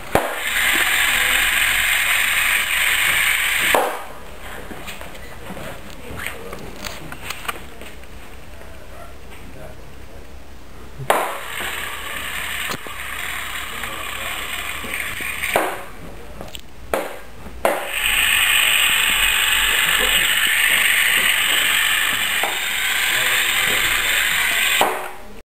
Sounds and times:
Speech: 13.6s - 14.8s, 23.0s - 25.4s.

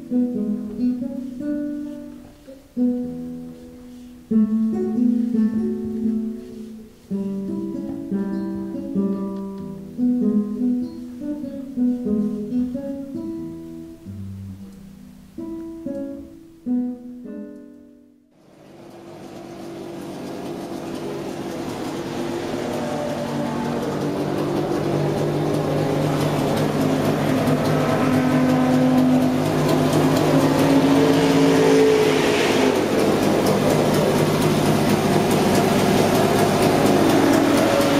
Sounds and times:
Music: 0.0s - 18.4s, 23.4s - 37.9s.

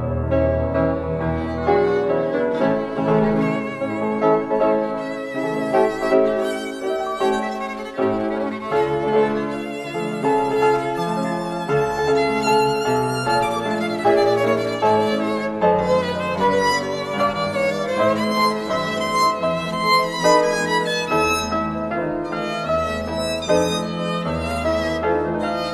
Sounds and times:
Piano: 0.0s - 25.7s
Violin, fiddle: 0.9s - 25.7s.

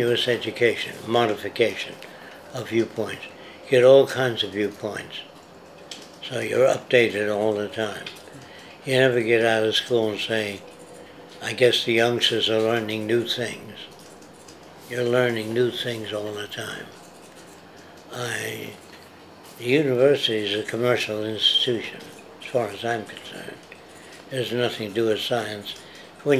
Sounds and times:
Speech: 0.0s - 5.4s, 6.2s - 8.2s, 8.8s - 10.6s, 11.4s - 14.0s, 14.9s - 17.0s, 18.1s - 18.8s, 19.6s - 23.7s, 24.3s - 26.3s.

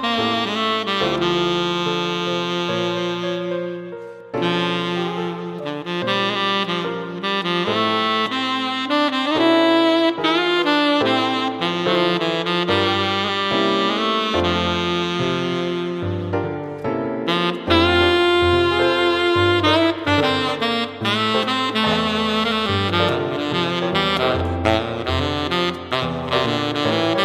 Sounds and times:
Brass instrument: 0.0s - 27.2s
Saxophone: 0.0s - 27.2s.

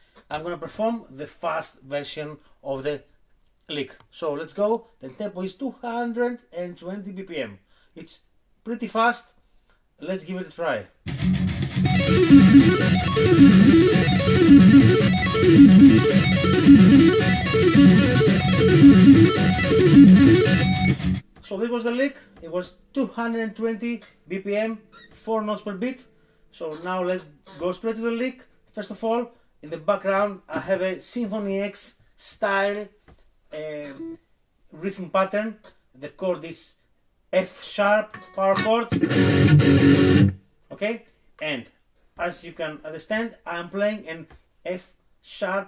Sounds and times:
Speech: 0.3s - 3.1s, 3.7s - 9.4s, 10.0s - 11.0s, 21.4s - 39.0s, 40.7s - 45.6s
Tapping (guitar technique): 11.1s - 21.4s, 38.1s - 40.4s.

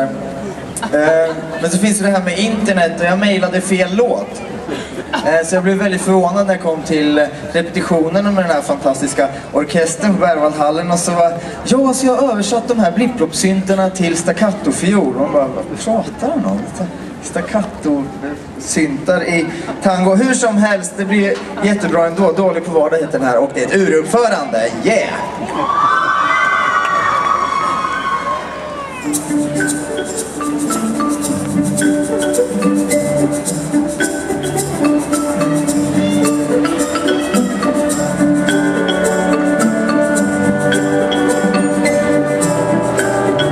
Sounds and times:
Speech: 5.2s - 25.4s.

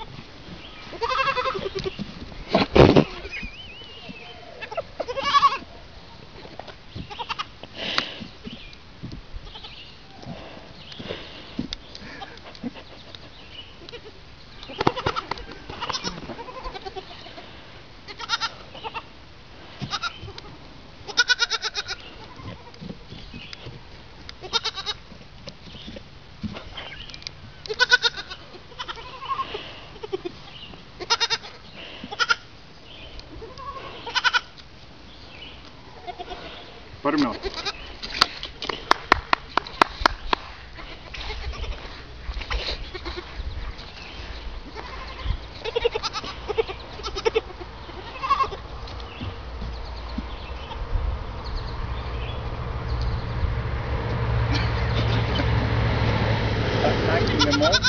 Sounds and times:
Goat: 0.0s - 32.5s, 33.1s - 34.8s, 35.5s - 50.8s, 57.1s - 57.8s
Domestic animals, pets: 0.8s - 6.2s, 7.0s - 7.6s, 9.4s - 11.1s, 12.0s - 19.1s, 19.7s - 25.1s, 26.8s - 32.5s, 33.1s - 34.6s, 35.5s - 38.2s, 40.7s - 50.9s.

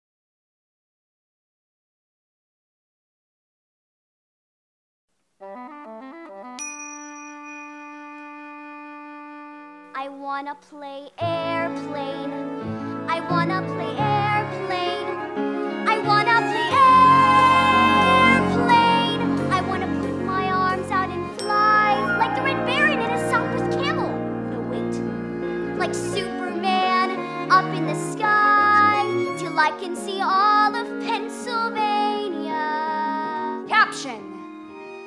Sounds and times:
Music: 5.4s - 35.0s
Ding-dong: 6.6s - 8.4s, 21.4s - 22.7s.

